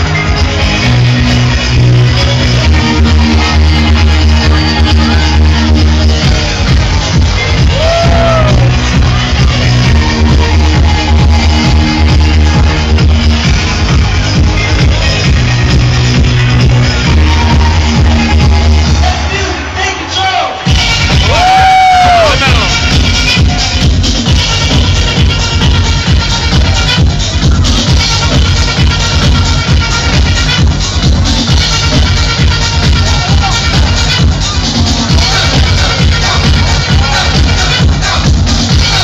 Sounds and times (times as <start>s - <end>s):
Music: 0.0s - 39.0s.